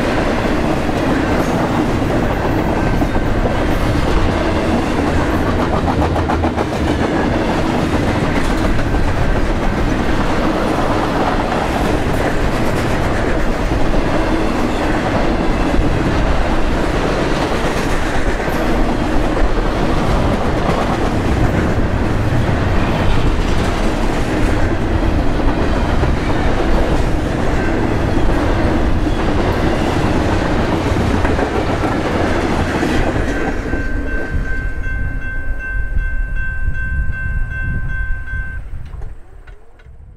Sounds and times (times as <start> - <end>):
Railroad car, train wagon: 0.0 - 40.1
Train: 0.0 - 40.1.